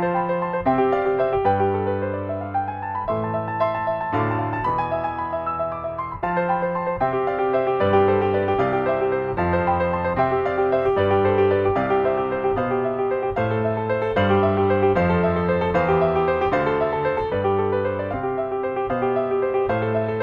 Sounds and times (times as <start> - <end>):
Piano: 0.0 - 20.2.